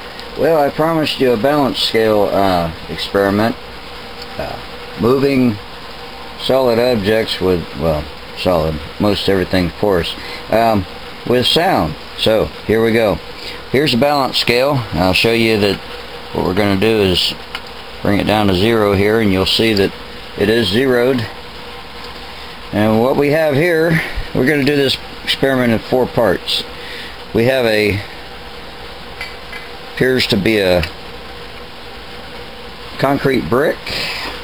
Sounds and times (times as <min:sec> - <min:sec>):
Speech: 0:00.4 - 0:03.6, 0:04.4 - 0:05.6, 0:06.4 - 0:17.4, 0:18.0 - 0:21.4, 0:22.7 - 0:26.7, 0:27.3 - 0:28.1, 0:30.0 - 0:31.0, 0:33.0 - 0:34.0.